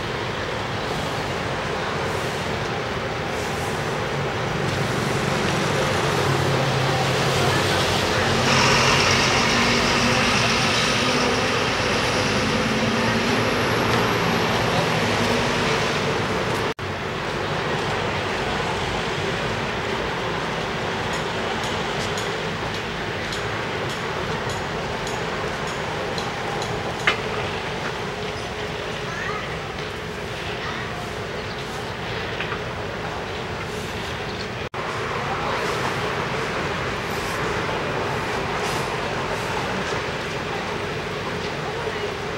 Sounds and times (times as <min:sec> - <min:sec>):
Outside, urban or manmade: 0:00.0 - 0:42.3
Traffic noise, roadway noise: 0:00.0 - 0:42.3.